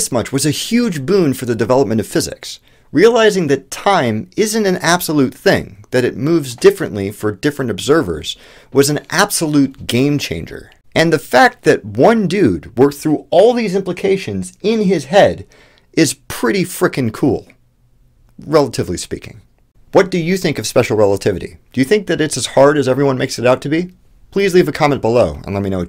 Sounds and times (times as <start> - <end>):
Speech: 0.0 - 17.6, 18.4 - 25.8.